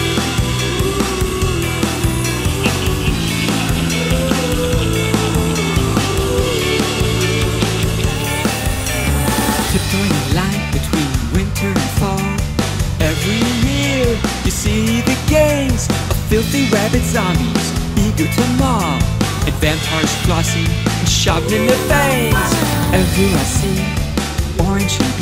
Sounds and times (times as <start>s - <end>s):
Pop music: 0.0s - 25.2s.